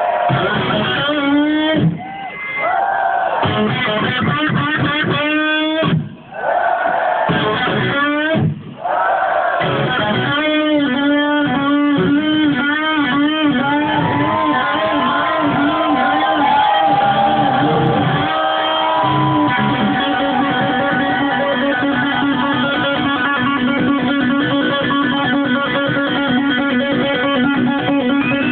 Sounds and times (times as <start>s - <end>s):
Electric guitar: 0.0s - 2.0s, 3.4s - 6.2s, 7.3s - 8.7s, 9.6s - 28.5s.